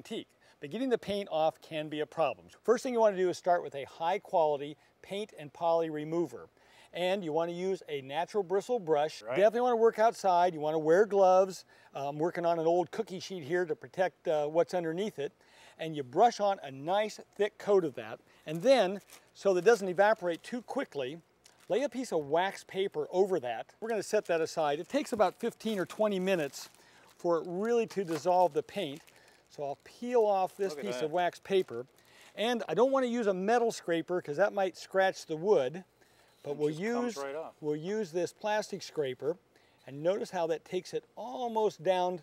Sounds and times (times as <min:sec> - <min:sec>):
Speech: 0:00.0 - 0:35.8, 0:36.5 - 0:42.2.